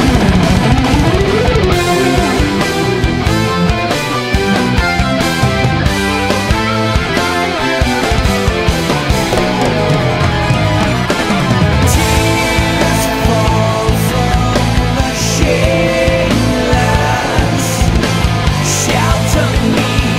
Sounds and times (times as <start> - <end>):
Progressive rock: 0.0 - 20.1.